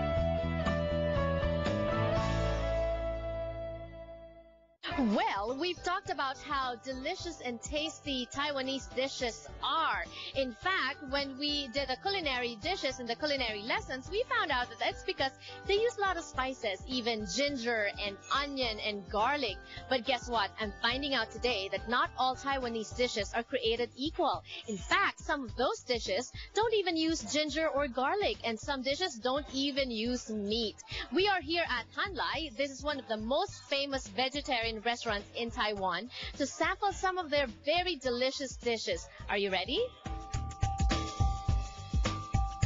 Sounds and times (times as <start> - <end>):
Music: 0.0 - 42.6
Speech: 4.8 - 40.0.